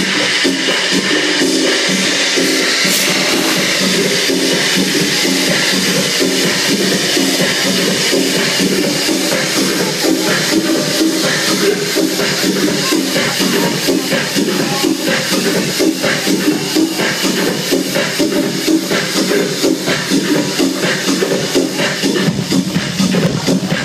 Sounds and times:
Dance music: 0.0 - 23.8
Speech: 6.9 - 17.8.

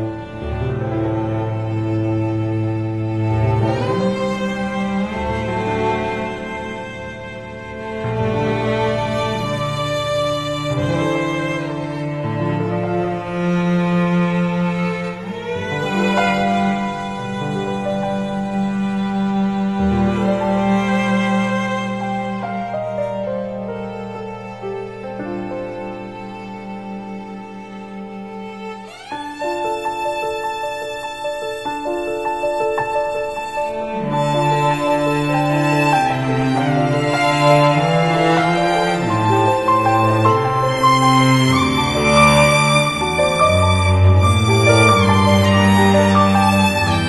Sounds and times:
Violin, fiddle: 0.0 - 47.0.

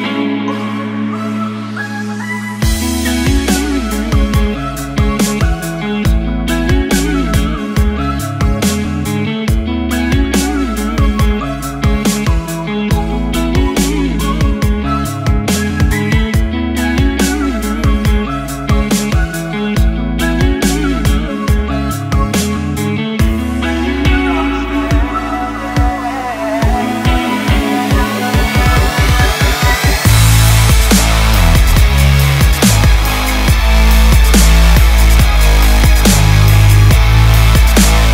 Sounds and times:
Dubstep: 2.5 - 38.1.

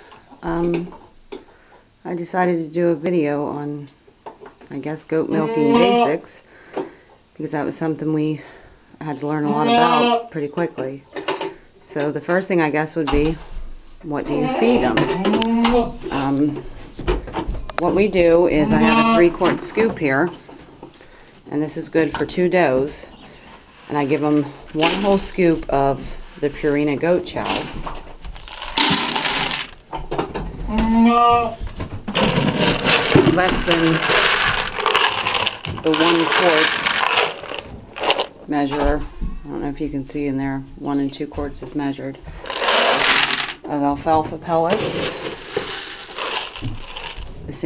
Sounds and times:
Speech: 14.1 - 15.1, 17.8 - 20.3, 23.9 - 27.7, 33.3 - 34.1, 35.9 - 36.8, 38.5 - 42.2, 43.7 - 45.1.

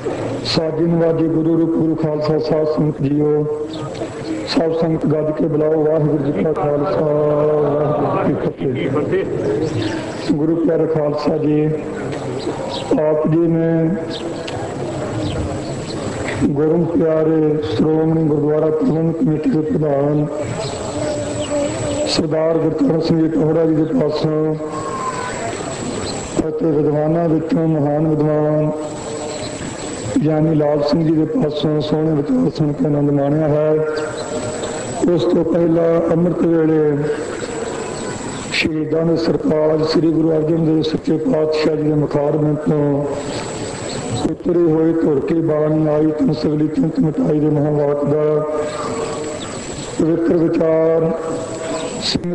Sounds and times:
Narration, monologue: 0.0 - 52.3
Male speech, man speaking: 0.4 - 3.9, 4.5 - 12.0, 12.9 - 14.1, 16.4 - 21.1, 22.0 - 24.8, 26.4 - 28.9, 30.2 - 34.1, 35.0 - 37.2, 38.6 - 43.2, 44.3 - 48.7, 50.0 - 51.3, 52.0 - 52.3.

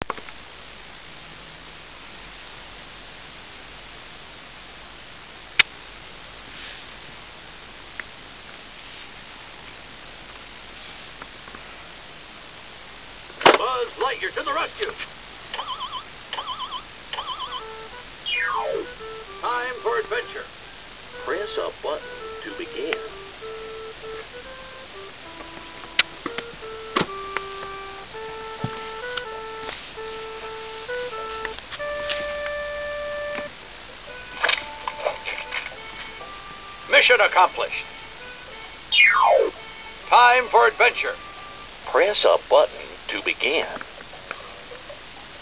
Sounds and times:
Speech: 13.5 - 15.1, 21.3 - 23.1, 36.9 - 37.8, 40.1 - 41.2, 41.9 - 43.9
Music: 17.2 - 42.5.

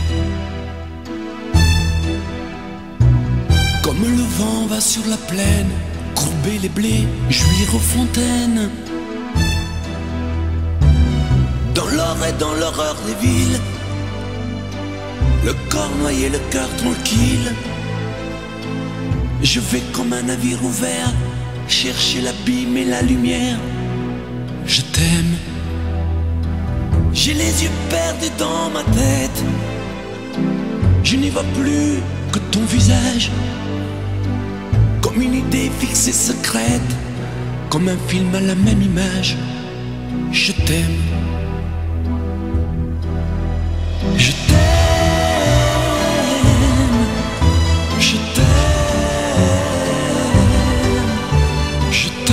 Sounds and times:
Music: 0.0 - 52.3.

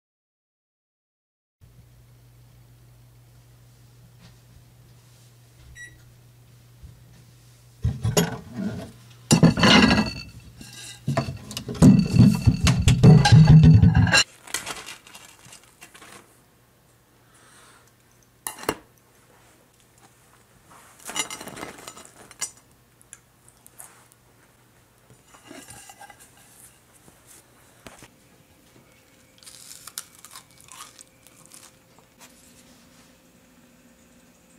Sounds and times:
Chewing, mastication: 29.0 - 32.3.

